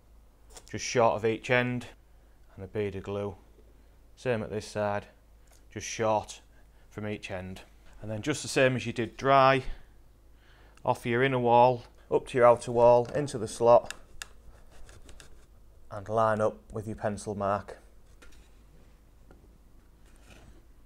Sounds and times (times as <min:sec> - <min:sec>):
Speech: 0:00.7 - 0:03.4, 0:04.2 - 0:09.8, 0:10.8 - 0:14.0, 0:15.9 - 0:17.8.